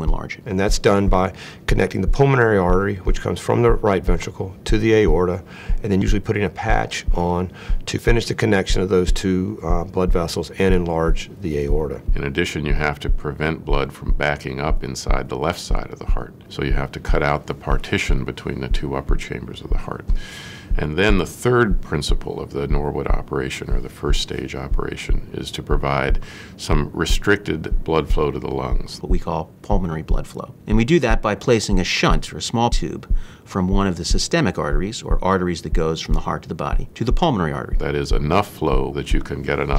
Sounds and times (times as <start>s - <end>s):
Speech: 0.0s - 39.7s.